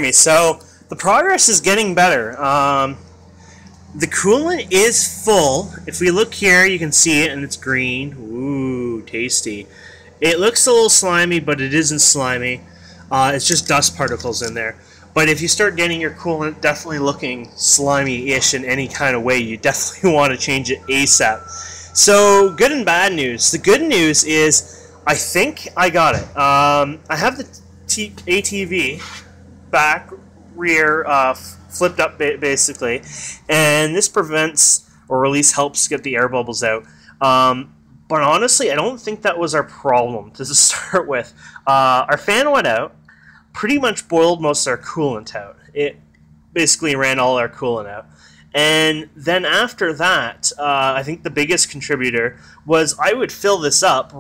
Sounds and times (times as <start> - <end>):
Speech: 0.0 - 3.0, 3.9 - 46.0, 46.6 - 54.2.